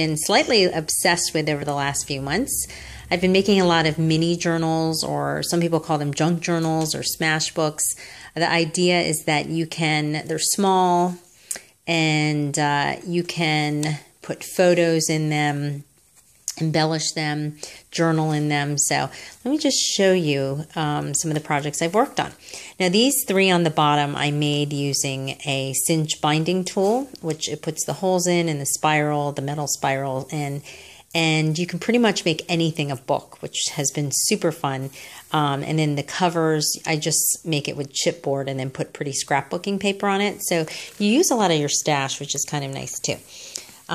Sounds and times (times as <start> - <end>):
Speech: 0.0 - 15.9, 16.5 - 43.9.